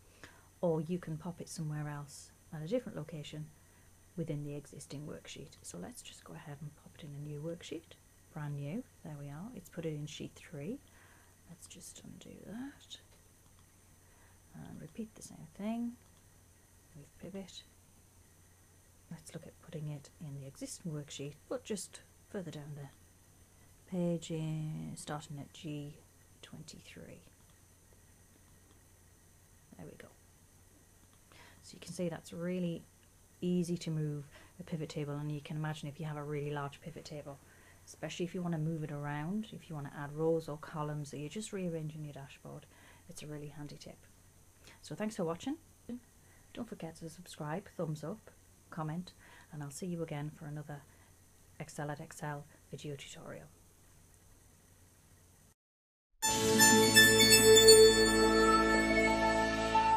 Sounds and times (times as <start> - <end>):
Speech: 0.6 - 3.6, 4.2 - 10.9, 11.5 - 13.2, 14.5 - 16.0, 17.0 - 17.8, 19.1 - 23.0, 23.9 - 27.4, 29.8 - 30.2, 31.6 - 44.1, 44.7 - 50.9, 51.6 - 53.6.